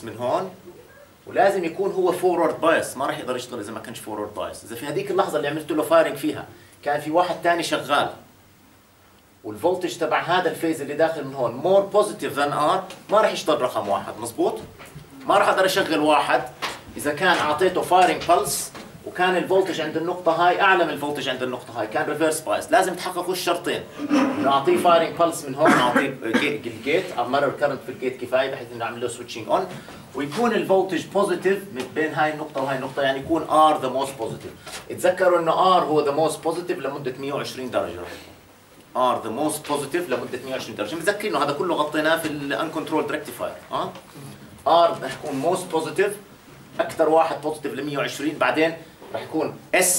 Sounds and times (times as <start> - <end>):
Speech: 0.0 - 8.3, 9.4 - 38.3, 38.9 - 44.0, 44.6 - 49.9.